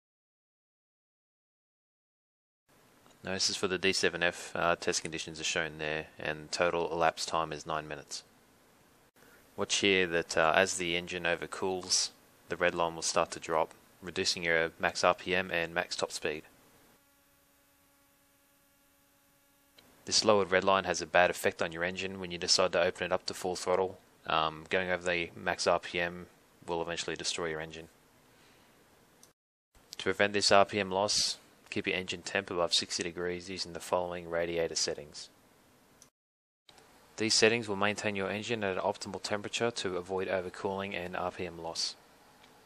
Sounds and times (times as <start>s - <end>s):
Speech: 3.2s - 8.3s, 9.6s - 16.5s, 20.1s - 28.0s, 30.0s - 35.4s, 37.2s - 42.0s.